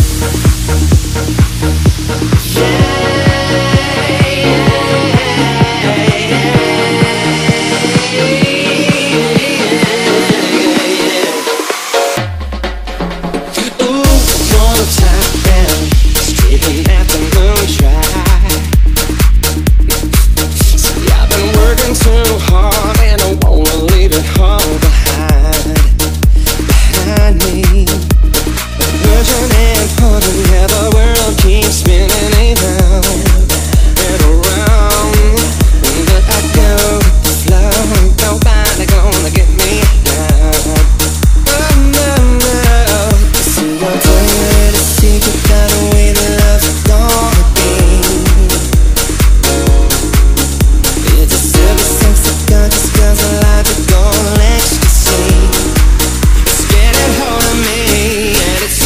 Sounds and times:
Music: 0:00.0 - 0:58.8.

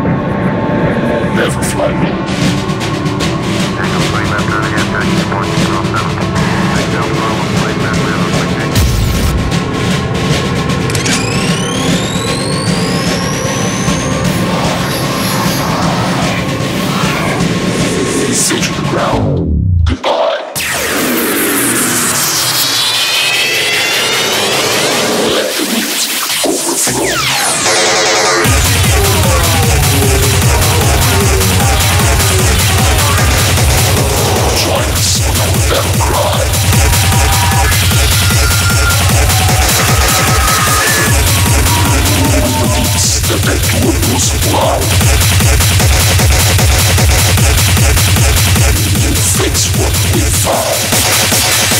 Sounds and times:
Music: 0:00.0 - 0:51.7.

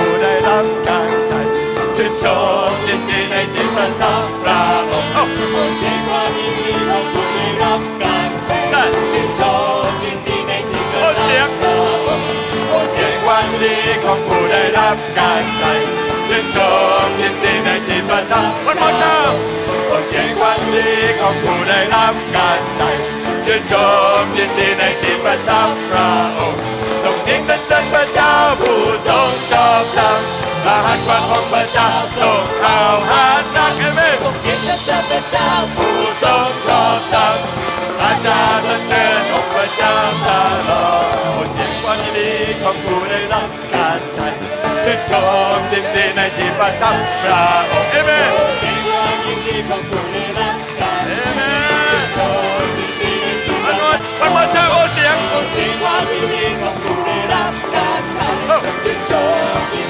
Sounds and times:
Music: 0:00.0 - 0:59.8.

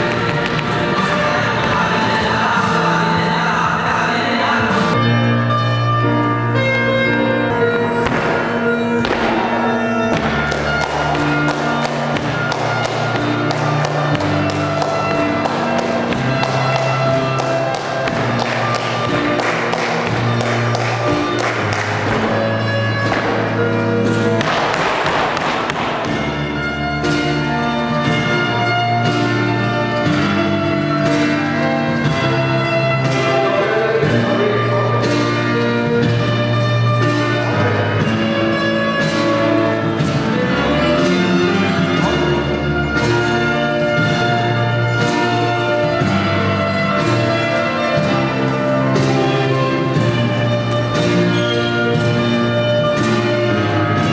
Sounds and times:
Flamenco: 0:00.0 - 0:54.1.

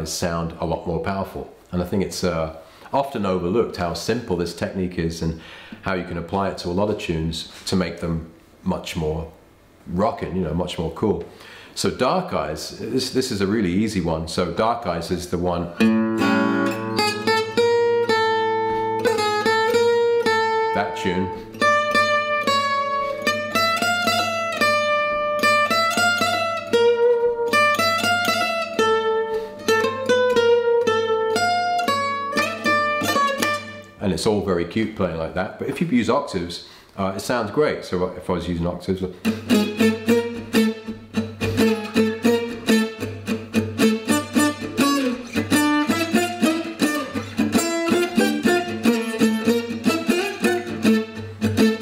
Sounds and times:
Speech: 0:00.0 - 0:15.8, 0:20.7 - 0:21.4, 0:34.0 - 0:39.2
Strum: 0:12.6 - 0:35.0, 0:39.1 - 0:51.8
Acoustic guitar: 0:14.6 - 0:34.4, 0:39.1 - 0:51.8.

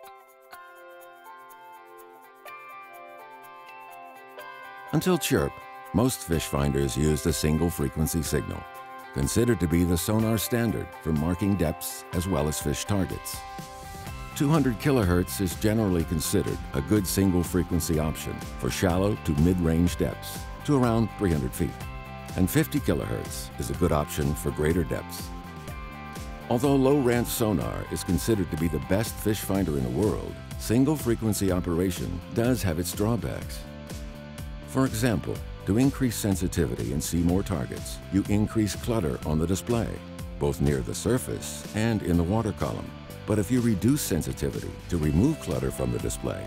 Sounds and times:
Music: 0:00.0 - 0:46.4
Speech: 0:04.9 - 0:13.4, 0:14.4 - 0:21.8, 0:22.4 - 0:25.3, 0:26.5 - 0:33.6, 0:34.7 - 0:46.4.

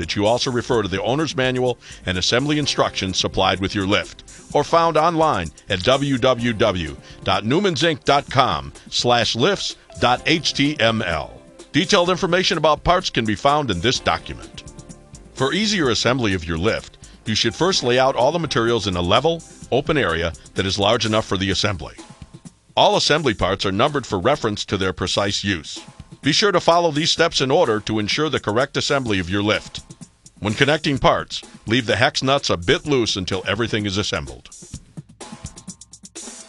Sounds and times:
Speech: 0:00.0 - 0:14.6, 0:15.4 - 0:22.0, 0:22.8 - 0:34.5
Music: 0:00.0 - 0:36.4.

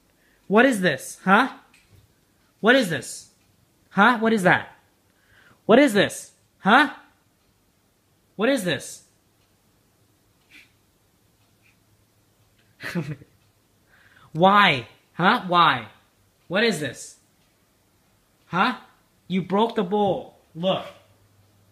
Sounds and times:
Speech: 0:00.5 - 0:01.7, 0:02.6 - 0:04.8, 0:05.7 - 0:07.1, 0:08.4 - 0:09.1, 0:14.3 - 0:17.2, 0:18.5 - 0:21.1.

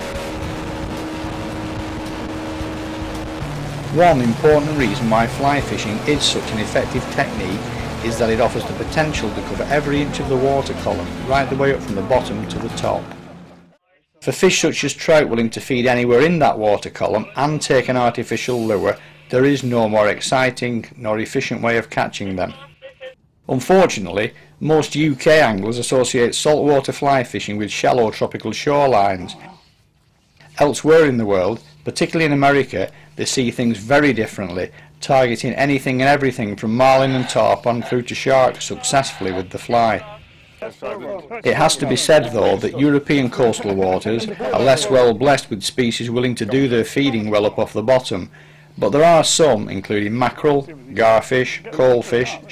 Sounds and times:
Music: 0:02.8 - 0:13.7
Speech: 0:03.9 - 0:13.0, 0:13.9 - 0:29.5, 0:30.6 - 0:52.5.

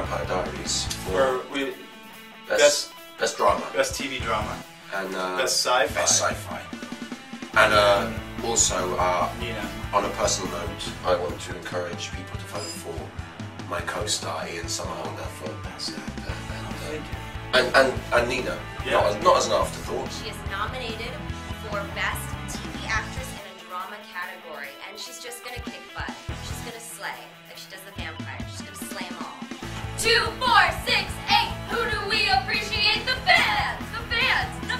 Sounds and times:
Music: 0:00.0 - 0:34.8
Speech: 0:02.5 - 0:06.7, 0:07.6 - 0:13.1, 0:13.7 - 0:17.0, 0:17.6 - 0:29.4.

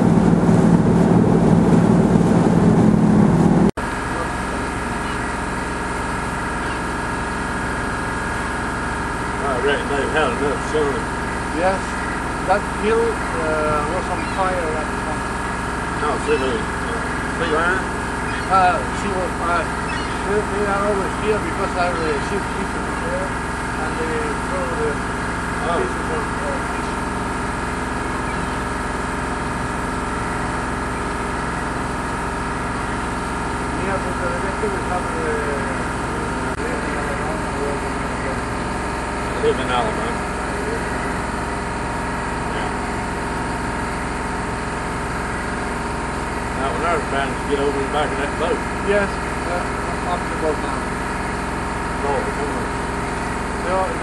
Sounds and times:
Motorboat, speedboat: 0:00.0 - 0:54.0
Speech: 0:04.0 - 0:05.2, 0:09.3 - 0:27.3, 0:33.6 - 0:41.4, 0:42.2 - 0:43.7, 0:46.5 - 0:51.0, 0:51.7 - 0:54.0.

